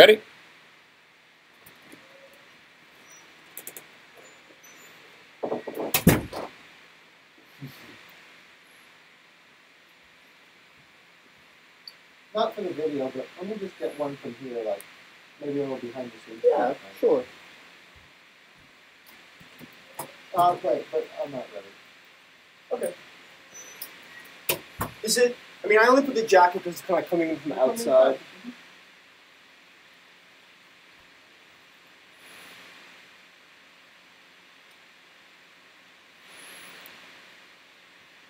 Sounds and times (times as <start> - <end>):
Speech: 0.0 - 0.2, 12.4 - 14.8, 20.4 - 21.8, 25.0 - 28.3.